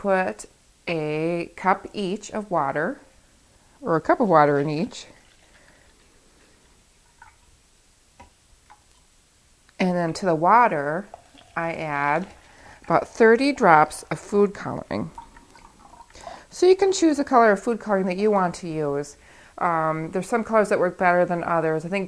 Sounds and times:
Water: 0:03.8 - 0:09.1, 0:09.8 - 0:17.5.

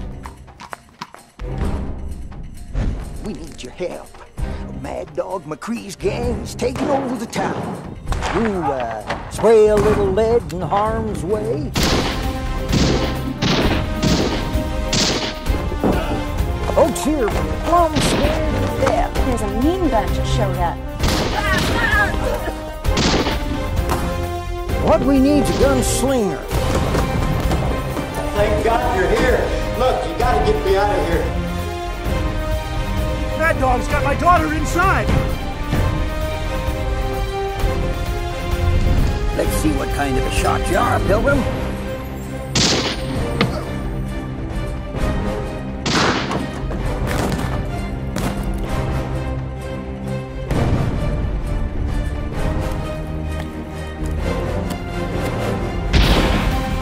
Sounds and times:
Music: 0:00.0 - 0:56.8.

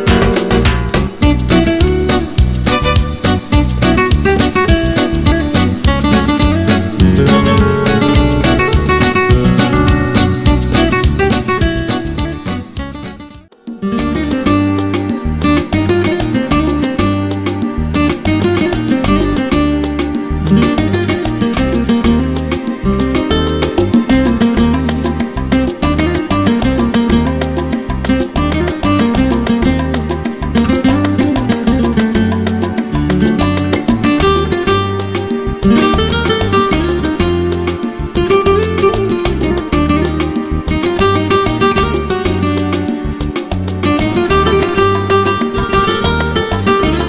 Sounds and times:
Flamenco: 0:00.0 - 0:47.0
Guitar: 0:00.0 - 0:47.0.

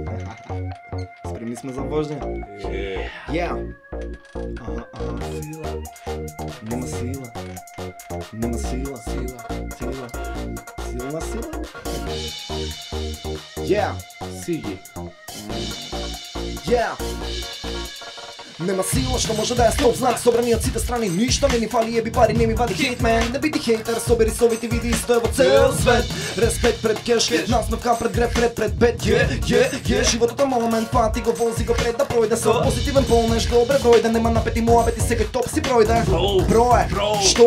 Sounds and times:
Music: 0:00.0 - 0:37.4.

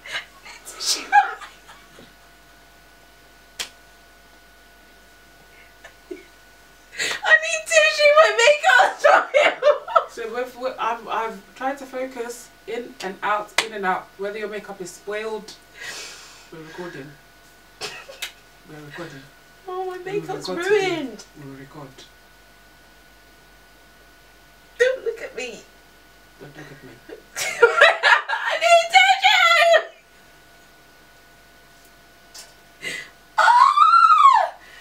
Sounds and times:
Speech: 0:07.3 - 0:09.0, 0:10.1 - 0:15.6, 0:24.8 - 0:25.7.

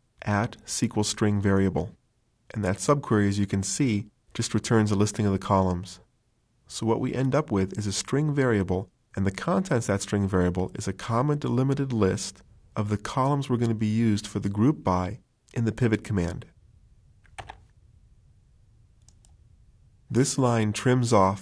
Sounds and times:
Speech: 0:00.2 - 0:06.1, 0:06.7 - 0:16.6, 0:20.1 - 0:21.4.

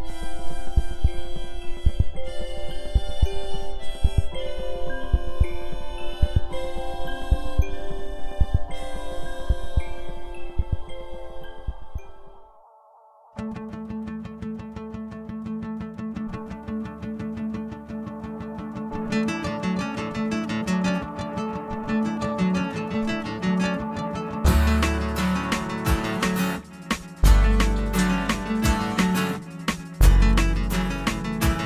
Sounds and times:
Music: 0:00.0 - 0:31.6.

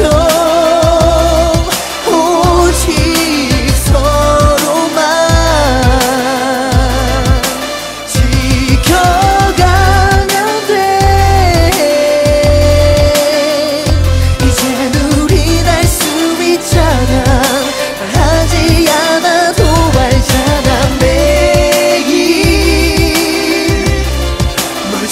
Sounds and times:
Music of Asia: 0:00.0 - 0:25.1.

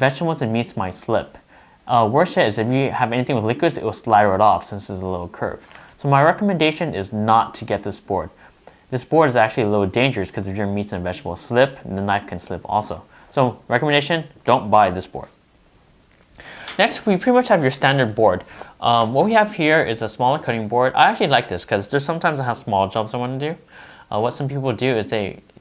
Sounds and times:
Speech: 0:00.0 - 0:15.4, 0:16.8 - 0:25.5.

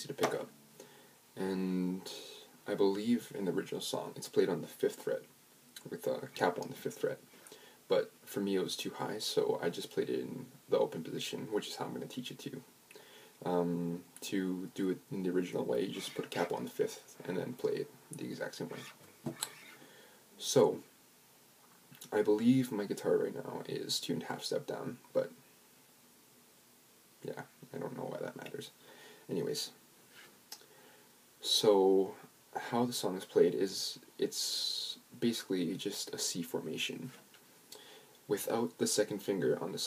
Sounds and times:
Speech: 0:00.0 - 0:00.6, 0:01.4 - 0:07.3, 0:07.9 - 0:12.7, 0:13.4 - 0:18.9, 0:20.4 - 0:20.9, 0:22.0 - 0:25.4, 0:27.2 - 0:29.8, 0:31.4 - 0:37.2, 0:38.3 - 0:39.8.

